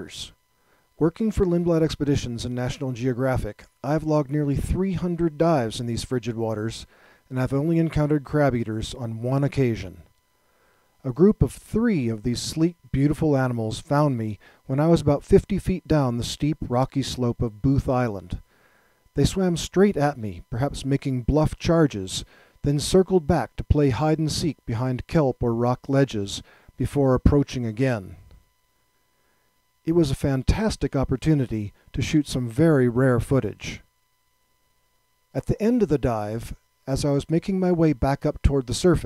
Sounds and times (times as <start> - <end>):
Speech: 0.0 - 0.4, 1.0 - 10.1, 11.0 - 18.4, 19.2 - 28.3, 29.9 - 33.9, 35.4 - 39.0.